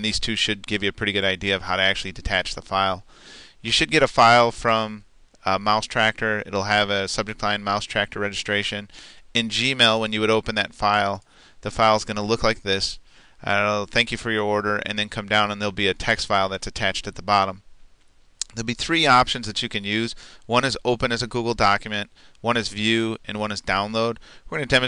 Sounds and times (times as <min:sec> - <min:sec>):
Speech: 0:00.0 - 0:03.0, 0:03.6 - 0:17.6, 0:18.4 - 0:24.8.